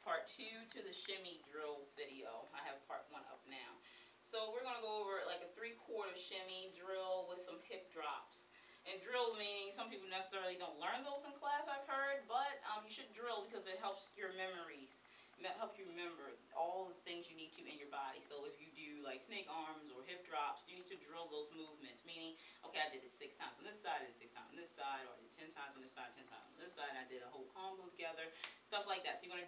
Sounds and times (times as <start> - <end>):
Speech: 0.0 - 29.4.